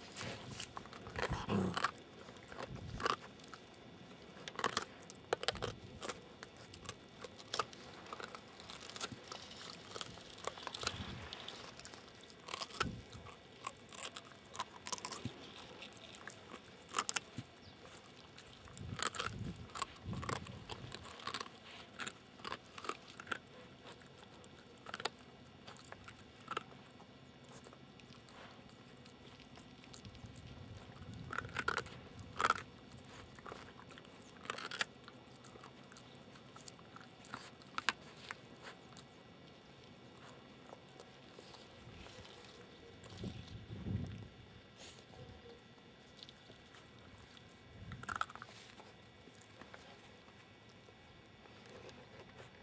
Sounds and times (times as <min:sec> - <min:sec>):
Chewing, mastication: 0:00.0 - 0:52.6.